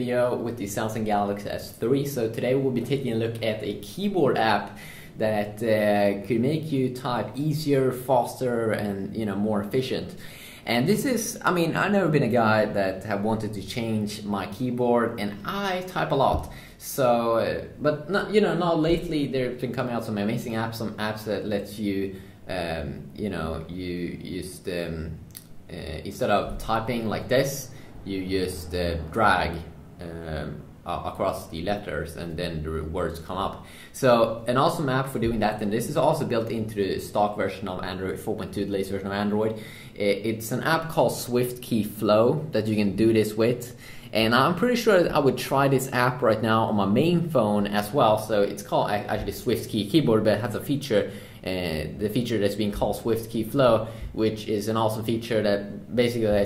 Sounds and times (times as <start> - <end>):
Speech: 0.0 - 56.4.